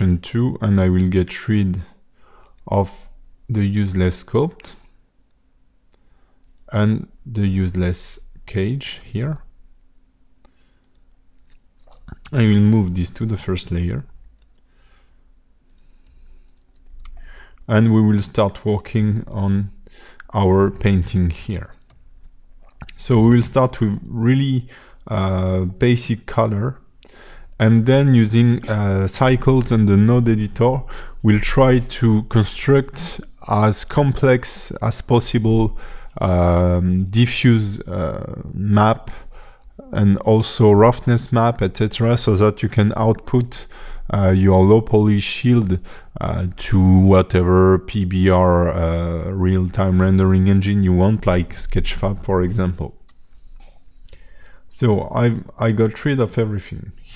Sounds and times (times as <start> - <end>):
Speech: 0.0 - 2.0, 2.6 - 4.9, 6.7 - 9.5, 12.1 - 14.2, 17.7 - 21.8, 22.8 - 26.9, 27.6 - 39.2, 39.8 - 53.0, 54.8 - 57.1.